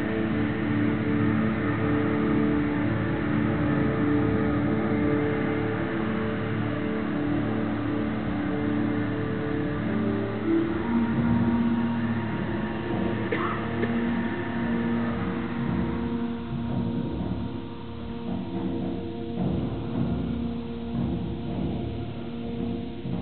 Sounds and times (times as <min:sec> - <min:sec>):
Timpani: 0:08.2 - 0:23.2.